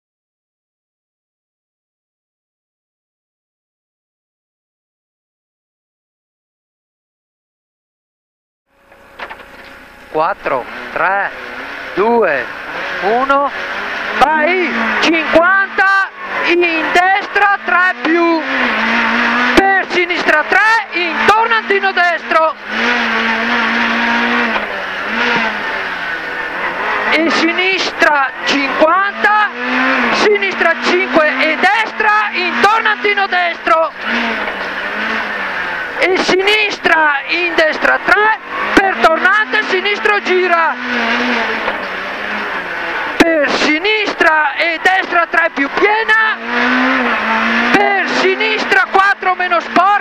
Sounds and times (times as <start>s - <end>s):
Car: 8.7s - 50.0s
Speech: 10.1s - 11.4s, 12.0s - 13.6s, 14.2s - 18.5s, 19.6s - 22.6s, 27.1s - 34.0s, 36.0s - 40.8s, 43.2s - 46.4s, 47.7s - 50.0s.